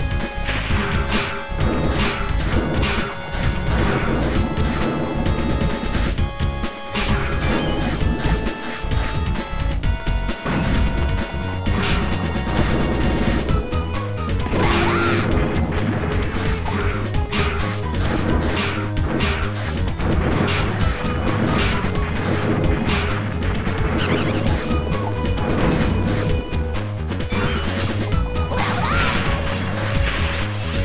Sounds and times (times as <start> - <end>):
Music: 0.0 - 30.8.